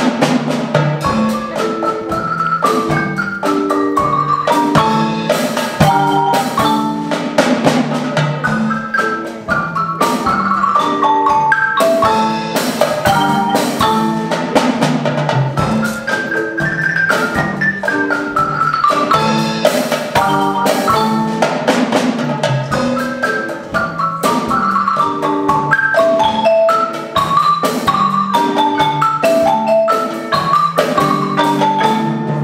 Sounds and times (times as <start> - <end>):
Percussion: 0.0 - 32.4.